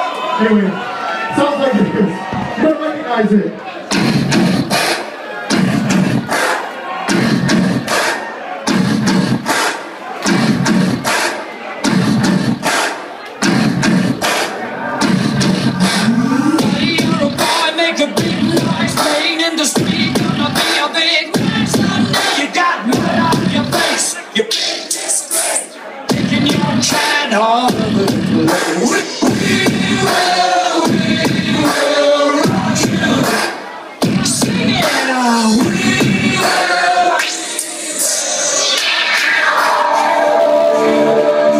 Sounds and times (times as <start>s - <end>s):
Music: 3.9s - 41.6s.